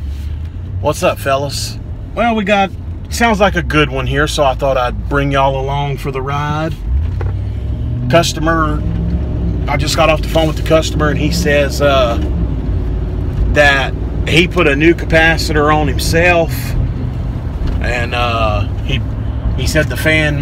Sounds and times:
Speech: 0:00.8 - 0:06.8, 0:13.5 - 0:16.7, 0:17.8 - 0:19.0, 0:19.6 - 0:20.4.

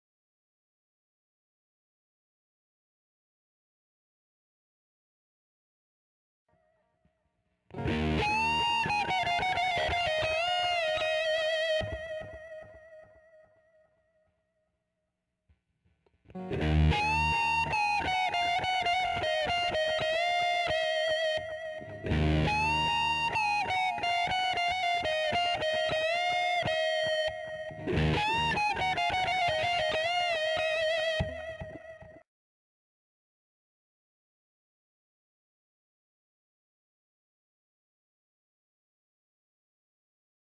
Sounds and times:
Electric guitar: 0:07.7 - 0:13.5, 0:16.3 - 0:32.2
Strum: 0:07.8 - 0:12.3, 0:16.3 - 0:32.0.

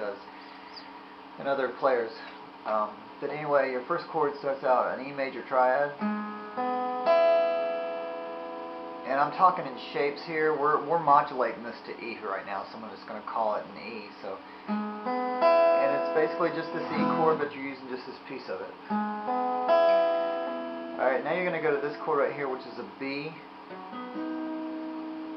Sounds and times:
Speech: 0:00.0 - 0:00.3, 0:01.4 - 0:06.0, 0:09.1 - 0:14.4, 0:15.8 - 0:18.8, 0:21.0 - 0:23.5
Acoustic guitar: 0:14.6 - 0:17.6
Strum: 0:14.9 - 0:18.0.

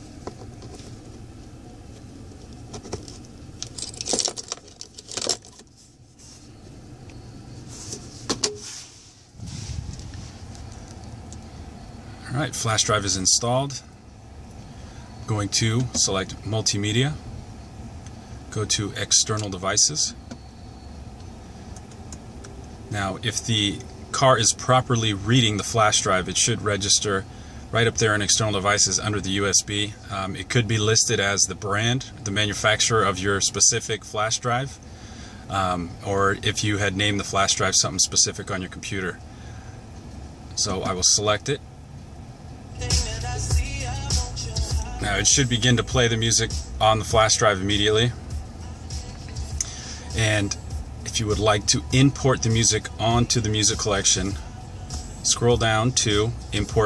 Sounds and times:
Speech: 0:12.2 - 0:13.9, 0:15.3 - 0:17.2, 0:18.5 - 0:20.2, 0:22.9 - 0:34.8, 0:35.5 - 0:39.2, 0:40.6 - 0:41.6, 0:45.0 - 0:48.2, 0:50.1 - 0:54.4, 0:55.2 - 0:56.8.

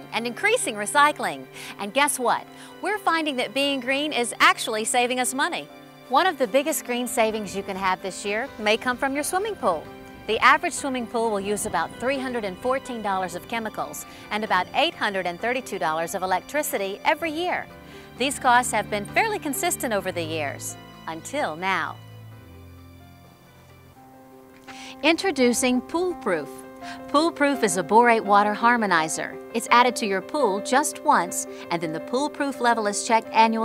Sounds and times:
Speech: 0:00.0 - 0:17.6, 0:18.2 - 0:22.0, 0:25.0 - 0:26.5, 0:27.1 - 0:33.6
Music: 0:00.0 - 0:33.6.

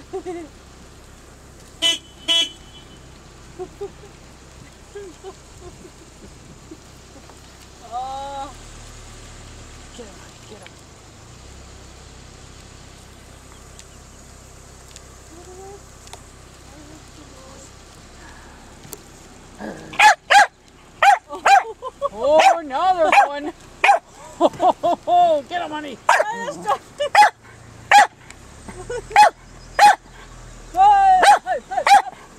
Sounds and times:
Speech: 0:09.9 - 0:10.8, 0:16.6 - 0:17.7, 0:21.3 - 0:23.6, 0:25.1 - 0:26.8, 0:30.8 - 0:31.9.

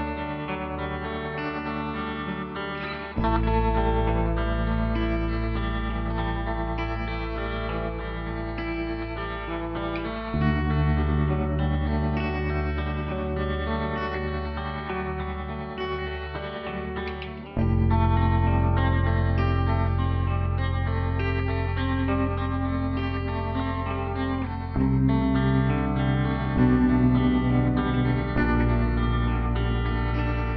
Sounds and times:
Effects unit: 0:00.0 - 0:30.5
Music: 0:00.0 - 0:30.5.

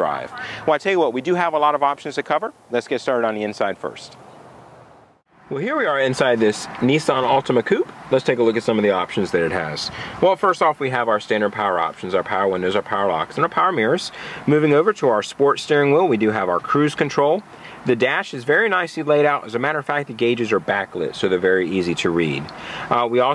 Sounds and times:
Speech: 0:00.0 - 0:04.2, 0:05.5 - 0:23.3.

